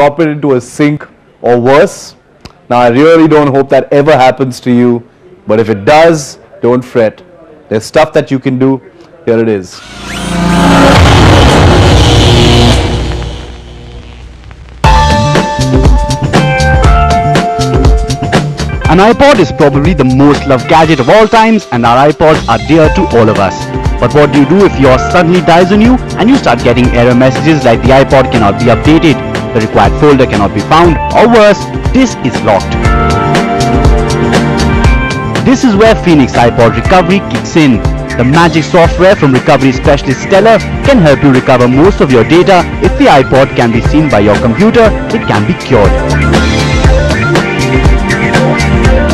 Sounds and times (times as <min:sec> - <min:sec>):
Speech: 0:00.0 - 0:09.8, 0:18.9 - 0:32.7, 0:35.5 - 0:46.0
Exciting music: 0:09.8 - 0:13.9, 0:14.8 - 0:21.4, 0:22.3 - 0:49.1.